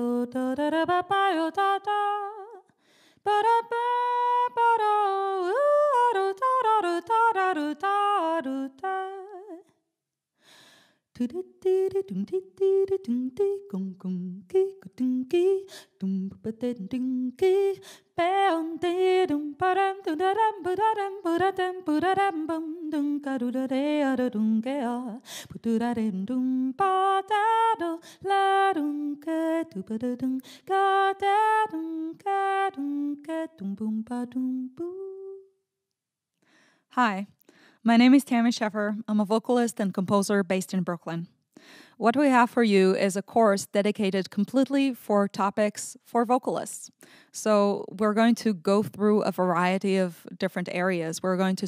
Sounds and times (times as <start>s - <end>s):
Female singing: 0.0s - 9.7s, 11.2s - 35.5s.